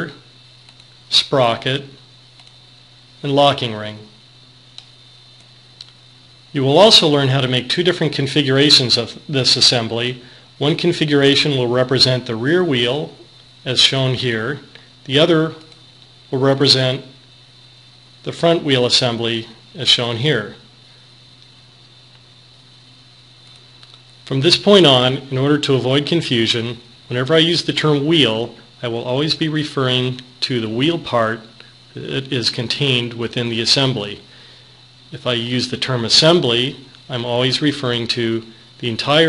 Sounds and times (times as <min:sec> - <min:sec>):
Speech: 0:00.0 - 0:00.3, 0:01.1 - 0:02.0, 0:03.2 - 0:04.2, 0:06.5 - 0:15.7, 0:16.3 - 0:17.2, 0:18.2 - 0:20.7, 0:24.3 - 0:34.3, 0:35.1 - 0:39.2.